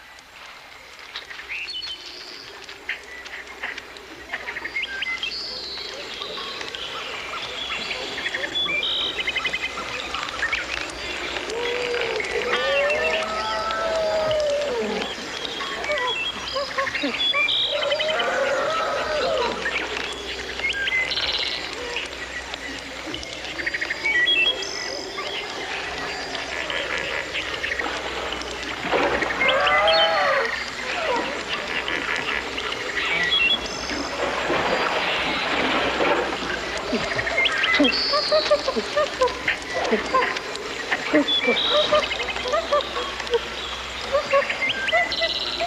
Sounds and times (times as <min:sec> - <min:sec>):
Outside, rural or natural: 0:00.0 - 0:45.6.